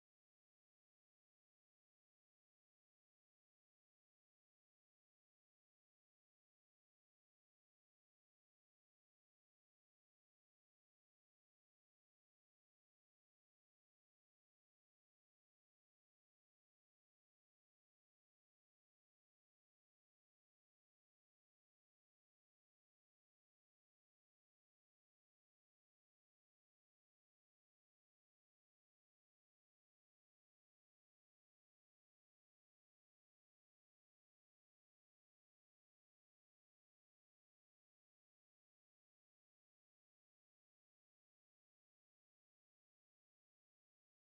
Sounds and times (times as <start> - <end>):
Music: 0.0 - 44.2.